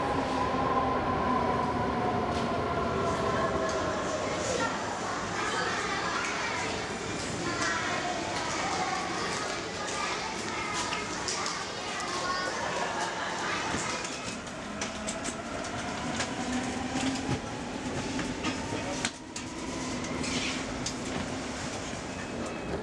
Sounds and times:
Subway, metro, underground: 0.0s - 22.8s
Train: 0.0s - 22.8s
Speech: 3.2s - 14.5s.

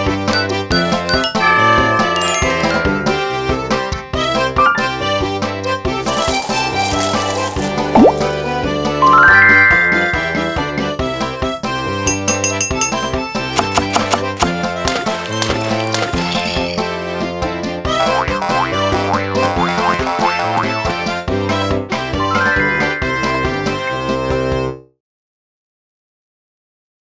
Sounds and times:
Music: 0.0s - 25.0s.

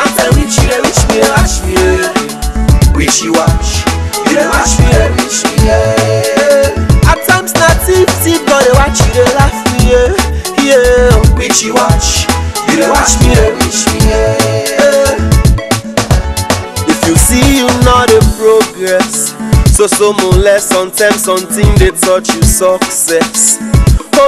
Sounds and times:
Funk: 0.0s - 24.2s
Pop music: 0.0s - 24.2s.

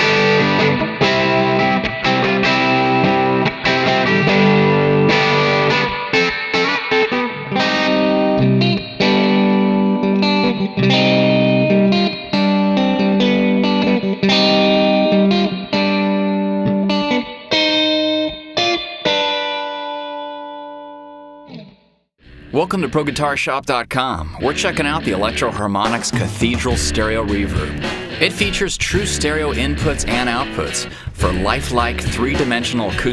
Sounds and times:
Distortion: 0.0s - 20.9s, 21.5s - 33.1s
Music: 0.0s - 23.4s, 24.4s - 33.1s
Speech: 22.5s - 33.1s.

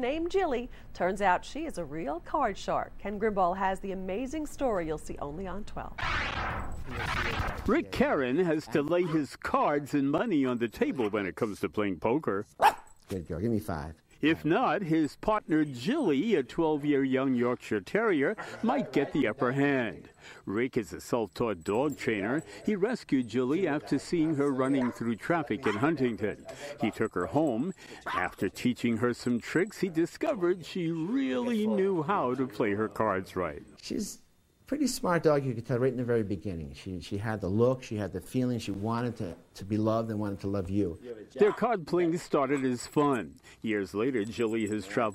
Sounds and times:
Speech: 7.0s - 12.5s, 13.1s - 45.1s
Bow-wow: 12.6s - 13.0s, 24.2s - 26.1s.

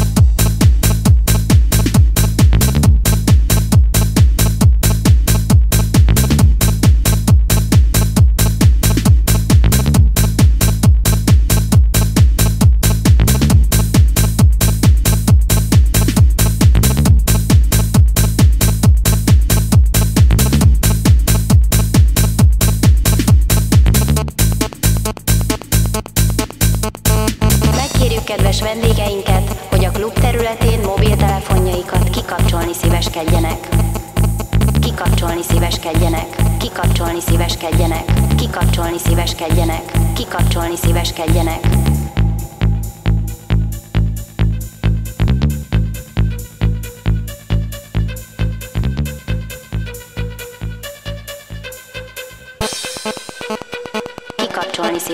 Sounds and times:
Music: 0.0s - 55.1s.

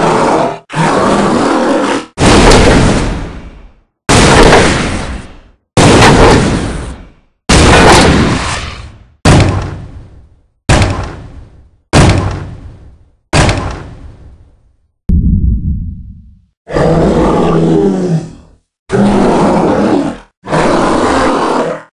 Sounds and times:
Sound effect: 0.0s - 21.9s
Grunt: 16.7s - 21.9s.

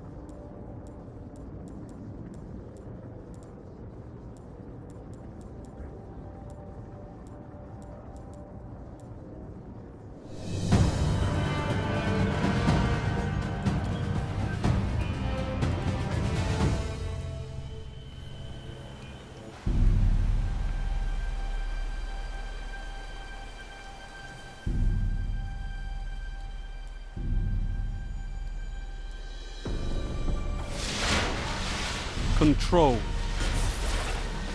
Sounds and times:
Music: 0.0s - 34.5s.

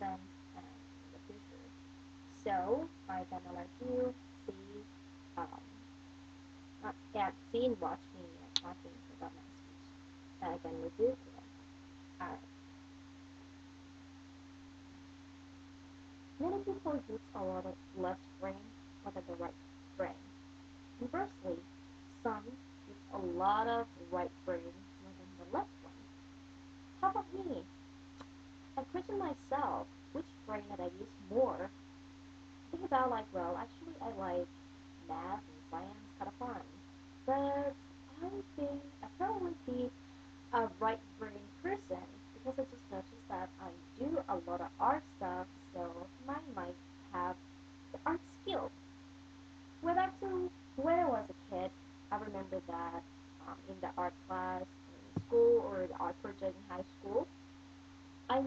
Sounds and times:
Female speech, woman speaking: 0.0s - 1.6s, 2.4s - 4.8s, 5.4s - 5.7s, 6.8s - 9.6s, 10.4s - 11.4s, 12.2s - 12.4s, 16.4s - 20.2s, 21.0s - 21.6s, 22.2s - 25.7s, 27.0s - 27.6s, 28.8s - 31.7s, 32.8s - 34.5s, 35.1s - 36.7s, 37.3s - 39.9s, 40.6s - 47.4s, 48.0s - 48.7s, 49.8s - 57.3s
Narration, monologue: 0.0s - 58.4s.

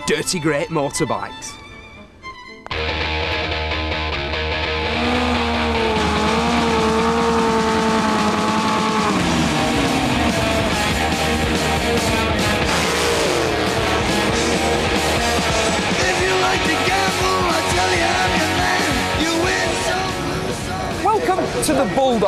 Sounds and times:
Speech: 0.0s - 1.6s, 21.0s - 22.2s
Music: 0.0s - 22.2s.

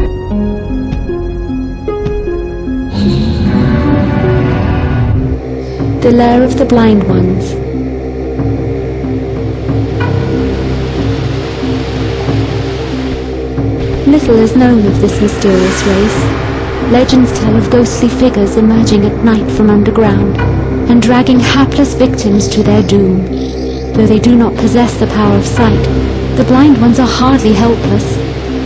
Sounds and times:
Speech: 6.0s - 7.6s, 14.0s - 16.3s, 16.9s - 28.2s.

